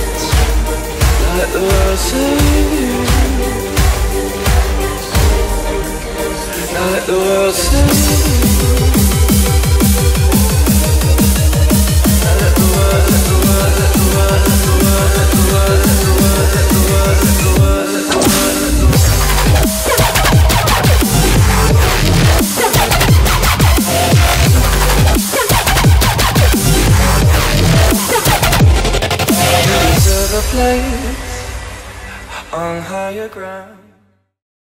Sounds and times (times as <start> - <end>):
Dubstep: 0.0 - 33.4.